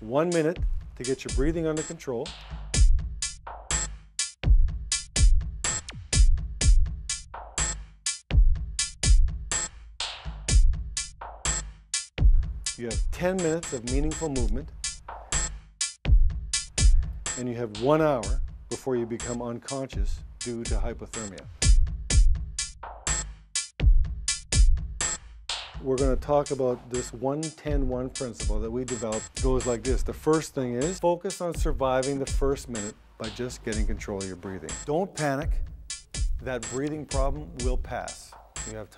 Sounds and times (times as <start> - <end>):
Speech: 0.0 - 2.4, 12.8 - 14.7, 17.4 - 21.5, 25.8 - 35.6, 36.4 - 38.9
Music: 0.0 - 38.9.